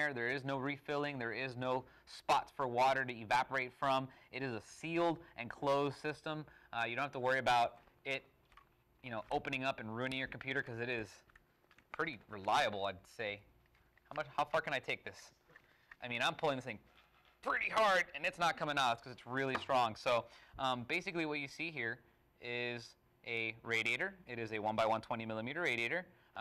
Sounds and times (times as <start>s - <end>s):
Speech: 0.0s - 8.3s, 9.0s - 11.3s, 12.0s - 13.5s, 14.1s - 15.4s, 16.0s - 16.8s, 17.4s - 26.4s.